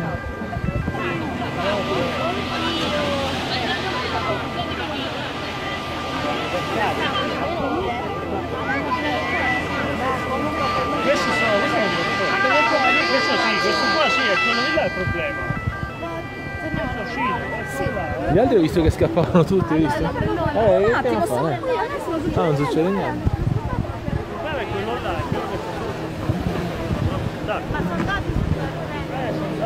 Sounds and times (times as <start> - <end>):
Hubbub, speech noise, speech babble: 0.0 - 29.6
Vehicle: 0.0 - 29.6.